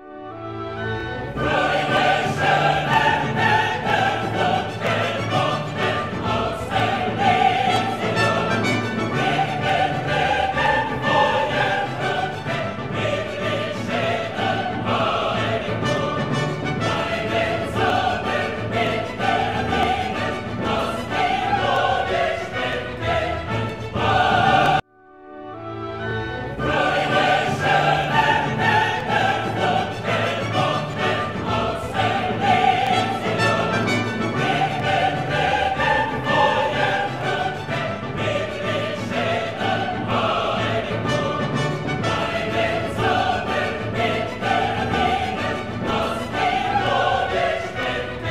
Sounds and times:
Music: 0.0s - 48.3s.

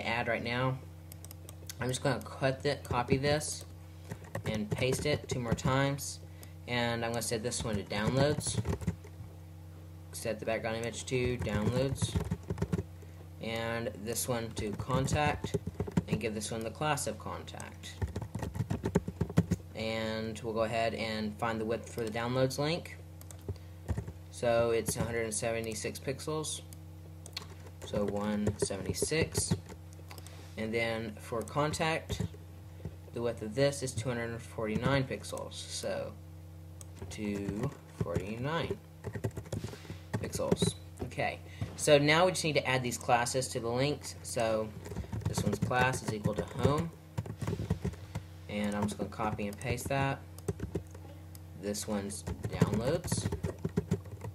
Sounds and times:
Typing: 7.6s - 9.1s, 11.2s - 12.9s, 14.6s - 16.2s, 18.0s - 19.6s, 23.2s - 24.2s, 27.3s - 29.8s, 37.4s - 38.3s, 39.0s - 40.8s, 44.8s - 48.0s, 48.6s - 51.0s, 52.2s - 54.3s.

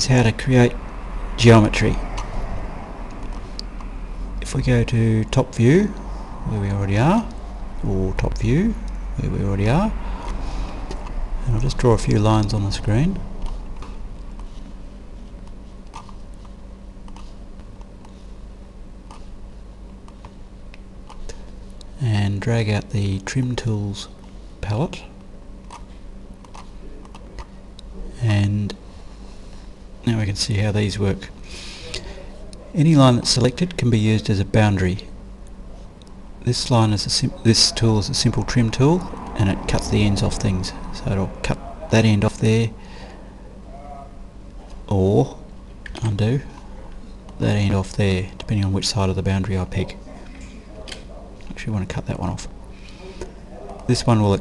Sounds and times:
Speech: 0.0s - 0.8s, 1.4s - 2.0s, 4.4s - 10.0s, 11.4s - 13.3s, 22.0s - 25.2s, 28.0s - 28.8s, 30.0s - 35.1s, 36.4s - 42.8s, 44.9s - 45.4s, 46.0s - 54.4s.

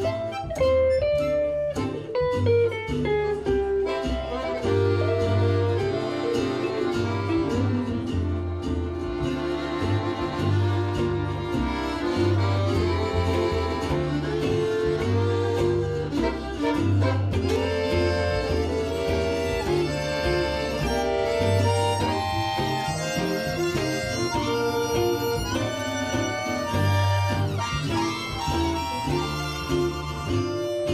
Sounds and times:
Bluegrass: 0.0s - 30.9s
Guitar: 0.0s - 30.9s.

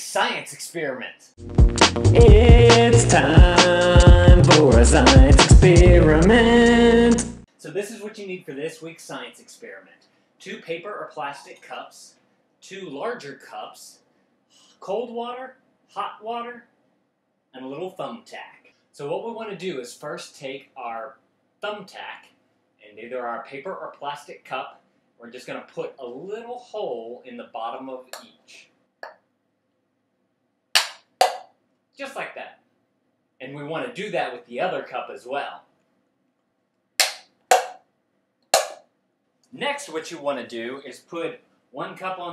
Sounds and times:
Speech: 0.0s - 1.3s, 7.5s - 14.0s, 14.7s - 16.7s, 17.6s - 28.7s, 32.0s - 32.6s, 33.4s - 35.7s, 39.5s - 42.3s.

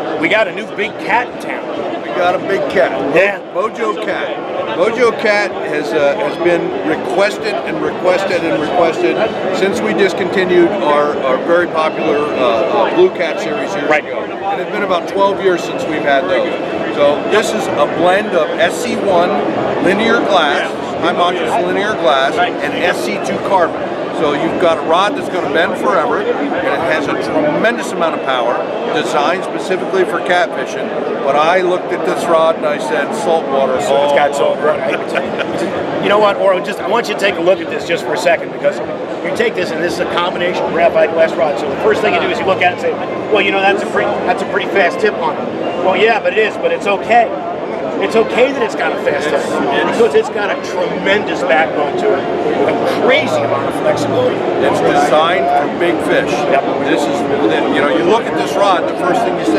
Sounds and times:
Speech: 0.0s - 47.4s, 48.0s - 59.5s.

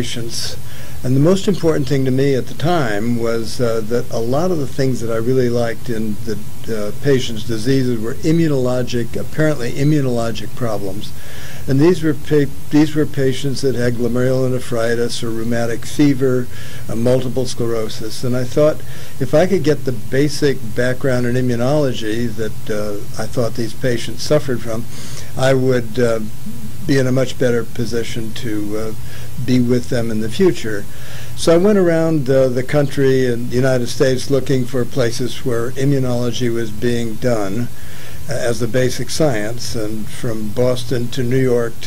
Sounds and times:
Male speech, man speaking: 0.0s - 37.7s, 38.3s - 41.8s
Narration, monologue: 0.0s - 41.8s.

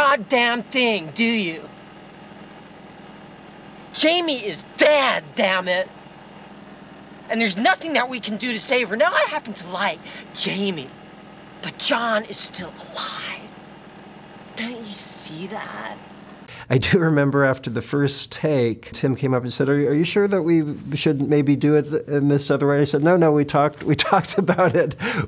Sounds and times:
Speech: 0.0s - 1.7s, 4.0s - 5.9s, 7.3s - 10.9s, 11.6s - 13.5s, 14.6s - 16.0s, 16.6s - 25.2s.

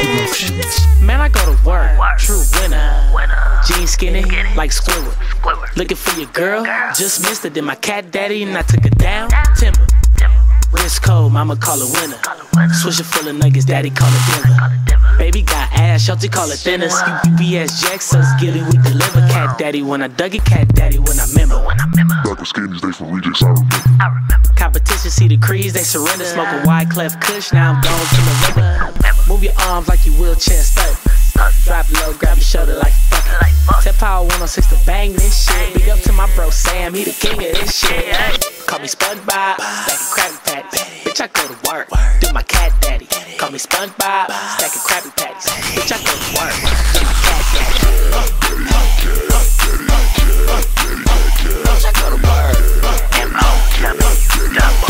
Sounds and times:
Music: 0.0s - 22.4s, 23.4s - 54.8s
Singing: 0.0s - 54.8s.

